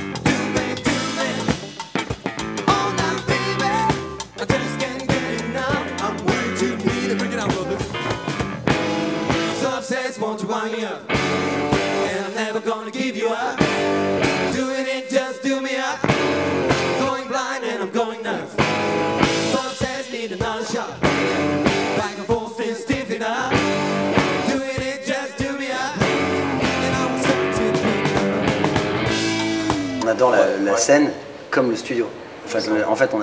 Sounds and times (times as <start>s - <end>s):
Drum kit: 0.0s - 9.8s, 11.1s - 12.4s, 13.6s - 14.7s, 16.0s - 17.2s, 18.6s - 30.6s
Psychedelic rock: 0.0s - 9.8s, 11.1s - 12.5s, 13.6s - 15.0s, 16.0s - 17.3s, 18.6s - 30.3s.